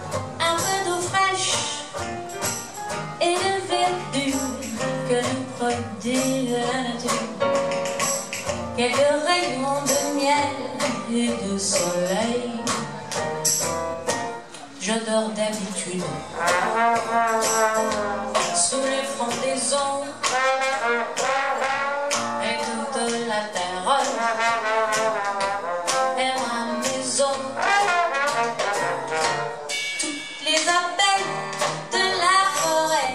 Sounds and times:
Music: 0.0 - 33.1.

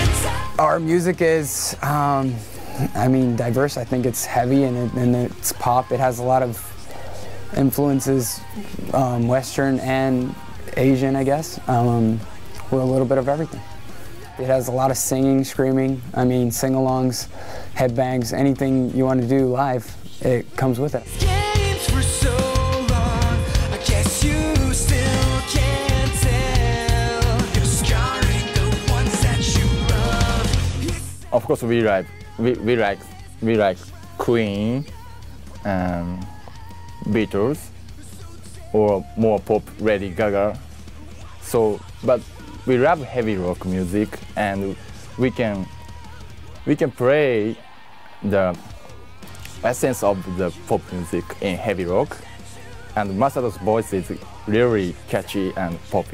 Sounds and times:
Song: 0.0 - 0.7, 21.0 - 31.2
Singing: 0.0 - 0.9, 1.6 - 16.0, 20.1 - 56.1
Heavy metal: 0.0 - 1.8, 21.1 - 31.2.

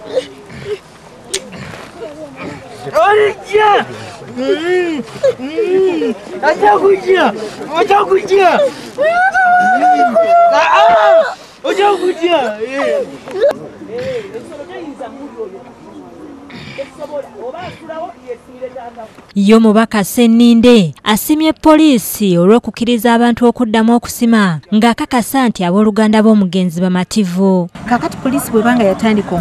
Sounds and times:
Chatter: 0.0 - 19.3
Outside, rural or natural: 0.0 - 29.4.

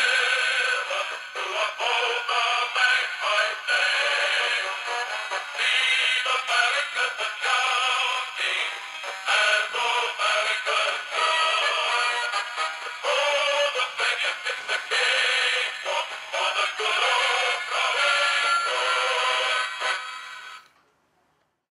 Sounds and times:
Synthetic singing: 0.0 - 20.0
Music: 0.0 - 20.7.

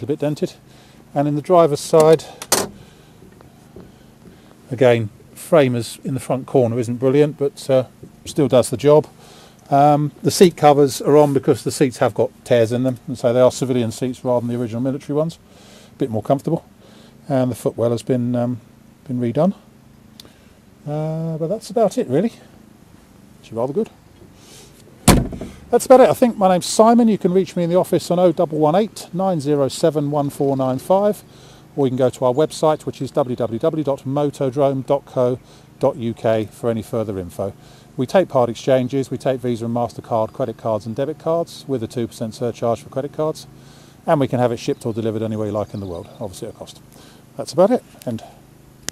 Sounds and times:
Speech: 0.0 - 2.4, 4.7 - 15.4, 16.0 - 19.7, 20.8 - 22.5, 23.4 - 24.0, 25.7 - 48.4
Outside, rural or natural: 0.0 - 48.9.

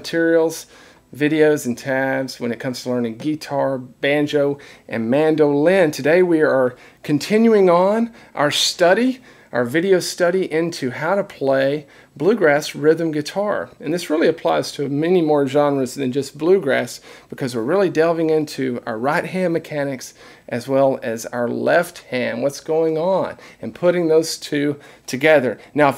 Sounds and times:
Speech: 0.0 - 25.9.

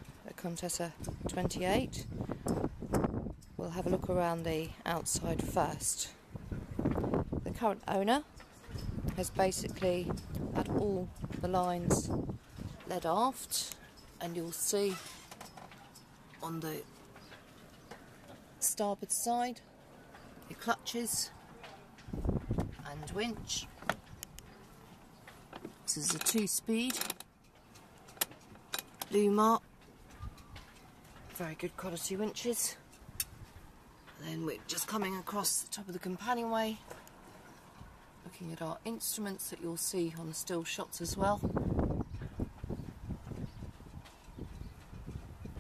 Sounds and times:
Speech: 0.3 - 2.0, 3.6 - 6.2, 7.4 - 8.3, 9.1 - 12.2, 12.8 - 15.1, 16.4 - 16.9, 18.6 - 19.6, 20.5 - 21.9, 22.8 - 23.7, 25.9 - 27.1, 29.1 - 29.6, 31.4 - 32.8, 34.2 - 36.9, 38.2 - 41.5.

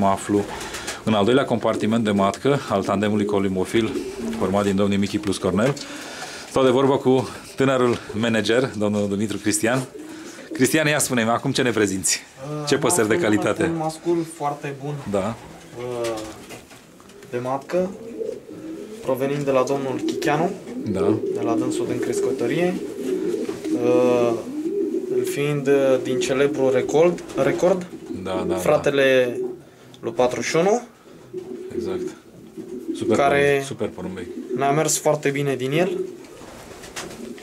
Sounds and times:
Speech: 0.0 - 5.8, 10.6 - 16.4, 19.1 - 22.8, 25.2 - 29.4, 30.0 - 30.9, 33.0 - 36.1.

